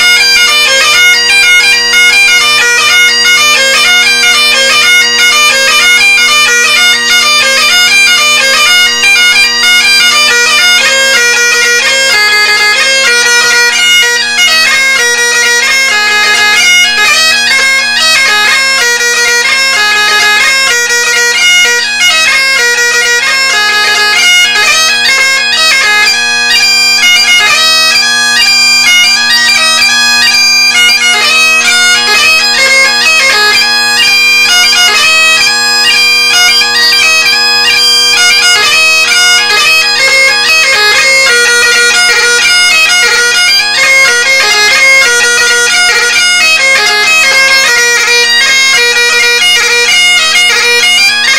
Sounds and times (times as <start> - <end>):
Bagpipes: 0.0 - 51.3.